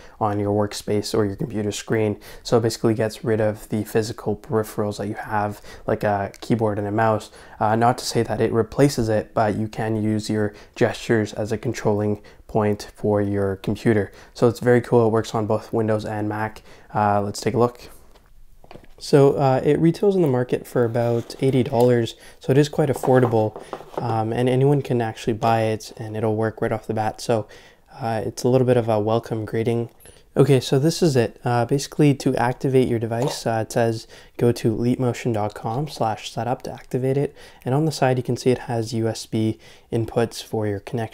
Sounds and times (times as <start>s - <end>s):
Speech: 0.0s - 18.0s, 19.0s - 41.1s.